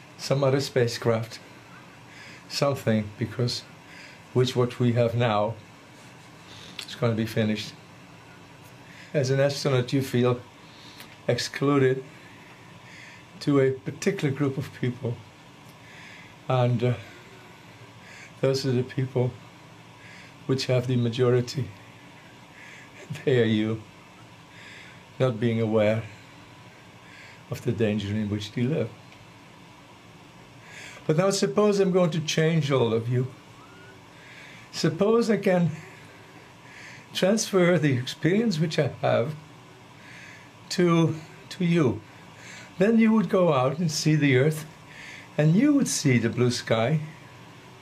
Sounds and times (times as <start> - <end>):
Narration, monologue: 0.0 - 47.8
Male speech, man speaking: 0.2 - 1.4, 2.5 - 3.7, 4.4 - 5.6, 6.8 - 7.8, 9.2 - 10.5, 11.3 - 12.1, 13.4 - 15.2, 16.5 - 17.1, 18.4 - 19.4, 20.5 - 21.8, 23.1 - 23.8, 25.2 - 26.1, 27.5 - 29.0, 31.1 - 33.4, 34.8 - 35.9, 37.2 - 39.4, 40.7 - 42.0, 42.8 - 44.7, 45.4 - 47.1.